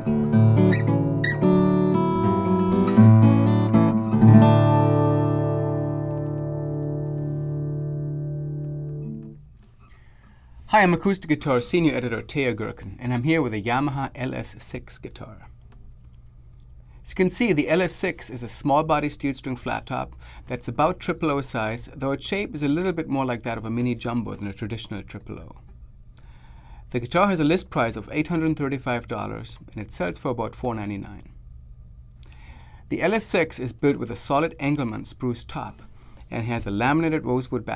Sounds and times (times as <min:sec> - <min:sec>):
Speech: 0:10.7 - 0:15.5, 0:17.0 - 0:25.7, 0:26.9 - 0:31.4, 0:32.9 - 0:37.7.